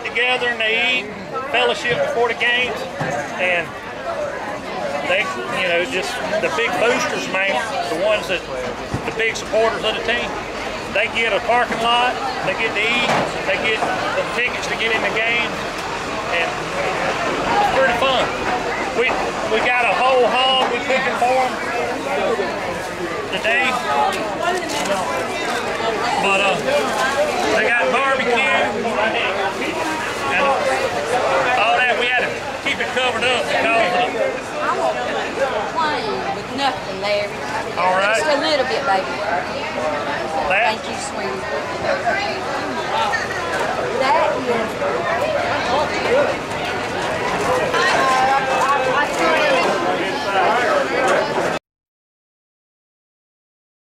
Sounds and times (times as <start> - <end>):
Crowd: 0.0 - 51.6.